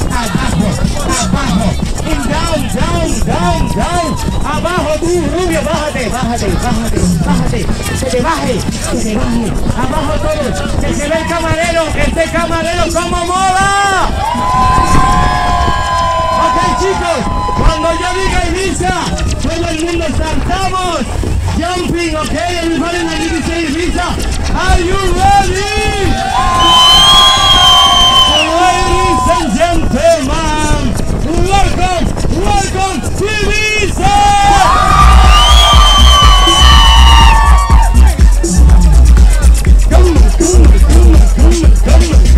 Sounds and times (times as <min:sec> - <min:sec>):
Speech: 0:00.0 - 0:14.1, 0:16.4 - 0:26.2, 0:28.5 - 0:34.6, 0:39.2 - 0:42.3
Music: 0:00.0 - 0:42.3.